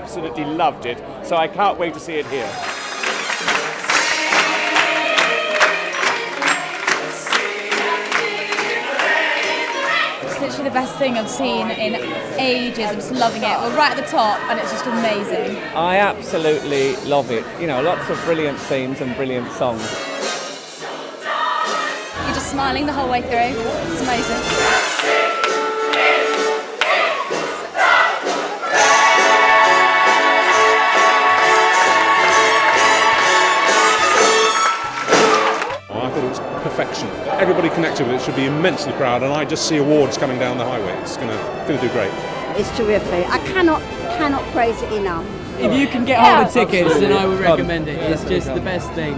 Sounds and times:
Music: 1.8s - 49.1s.

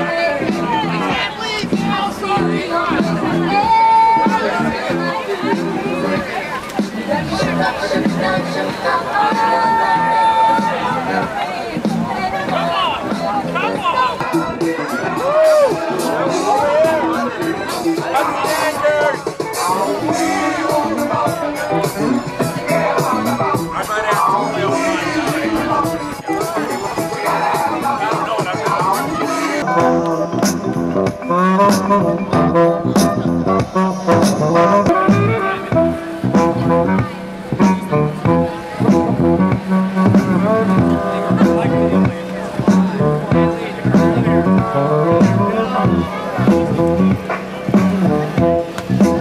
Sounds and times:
Speech: 0.0s - 30.9s, 36.4s - 49.2s
Music: 0.0s - 49.2s.

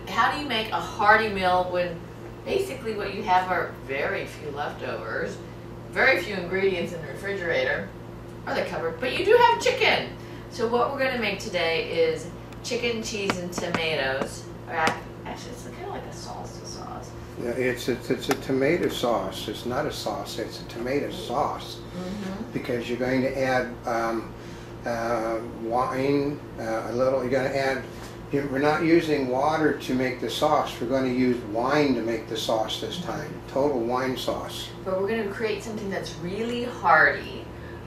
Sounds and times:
Speech: 17.4s - 23.5s, 32.4s - 33.7s.

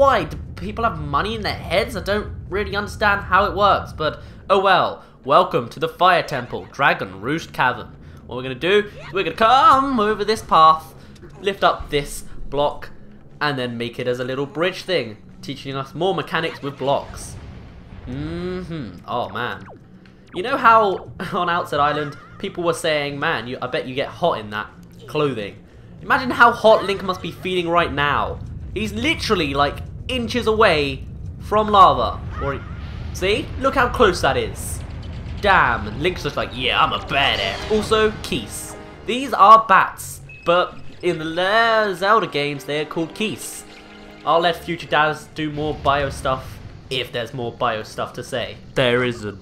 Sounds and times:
Speech: 0.0s - 17.4s, 18.1s - 19.7s, 20.4s - 34.8s, 35.4s - 43.7s, 44.3s - 49.4s
Music: 3.4s - 31.2s, 34.0s - 49.4s.

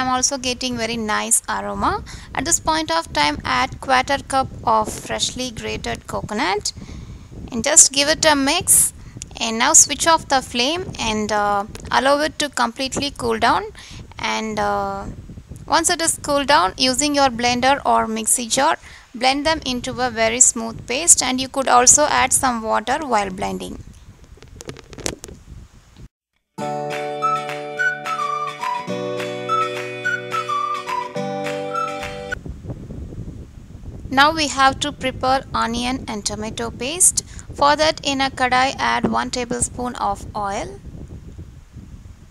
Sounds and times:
Speech: 0.0s - 6.7s, 7.5s - 15.1s, 15.7s - 23.8s, 34.1s - 40.8s
Music: 26.6s - 32.4s.

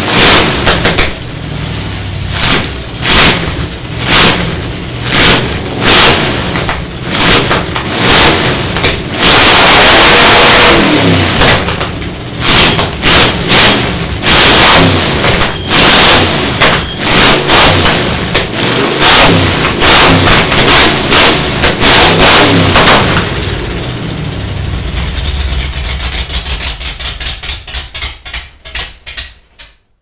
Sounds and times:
Car: 0.0s - 29.3s.

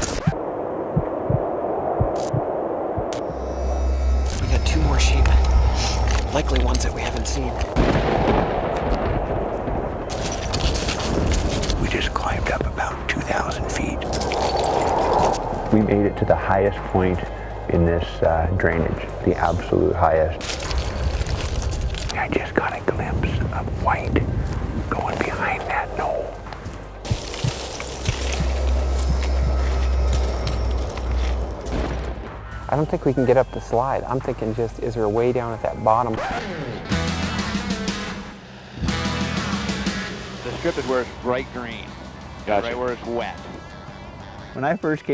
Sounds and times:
Music: 34.1s - 45.1s.

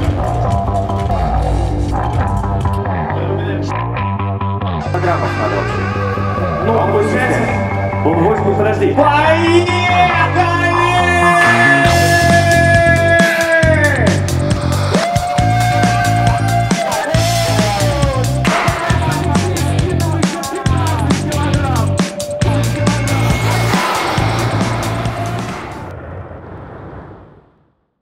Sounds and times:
Music: 0.0s - 25.9s.

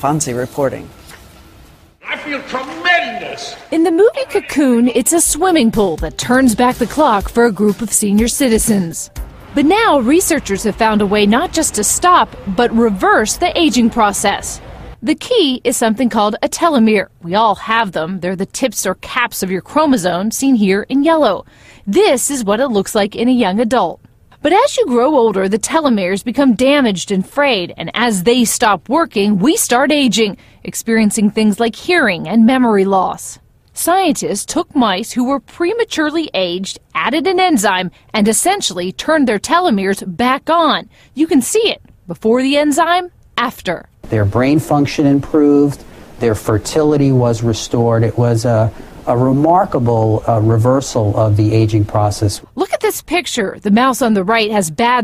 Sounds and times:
Speech: 2.0s - 55.0s.

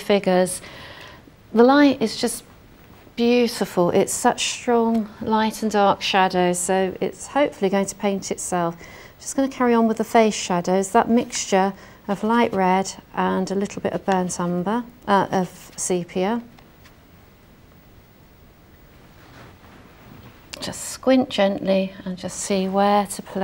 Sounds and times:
Speech: 0.0s - 0.6s, 1.5s - 2.5s, 3.2s - 16.5s, 20.6s - 23.4s.

